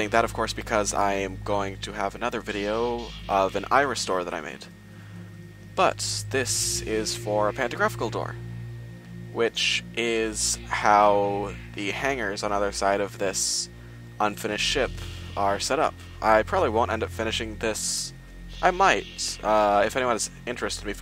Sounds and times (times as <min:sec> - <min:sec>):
Speech: 0:00.0 - 0:04.7, 0:05.8 - 0:08.4, 0:09.3 - 0:21.0.